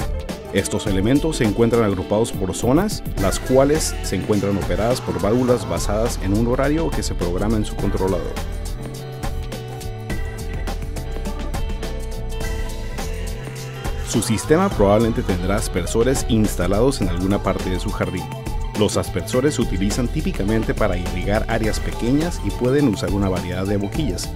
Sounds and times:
Music: 0:00.0 - 0:24.3
Speech: 0:00.6 - 0:08.4, 0:14.1 - 0:24.3.

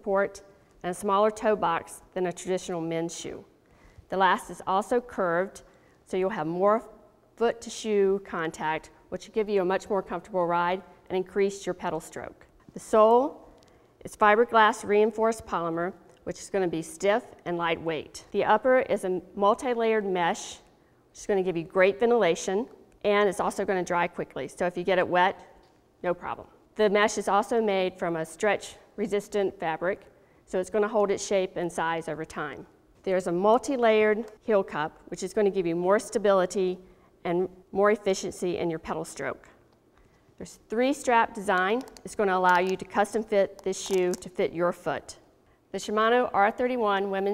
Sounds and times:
Speech: 0:00.0 - 0:03.5, 0:04.1 - 0:13.4, 0:14.0 - 0:25.4, 0:26.0 - 0:39.6, 0:40.4 - 0:45.2, 0:45.8 - 0:47.3.

